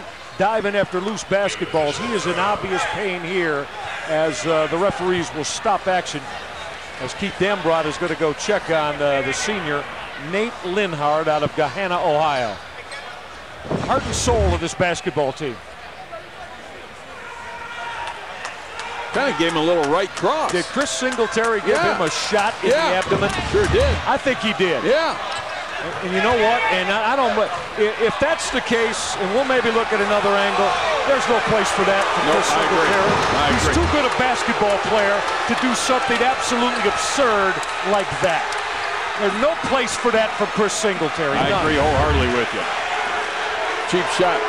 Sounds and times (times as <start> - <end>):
Speech: 0.4 - 6.3, 7.0 - 12.6, 13.9 - 17.0, 19.1 - 25.2, 25.8 - 38.5, 39.2 - 42.7, 43.9 - 44.4
Applause: 18.0 - 22.2.